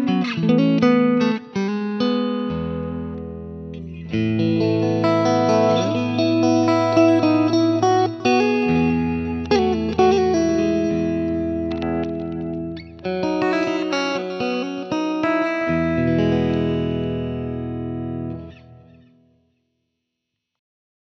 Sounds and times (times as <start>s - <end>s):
Music: 0.0s - 19.8s.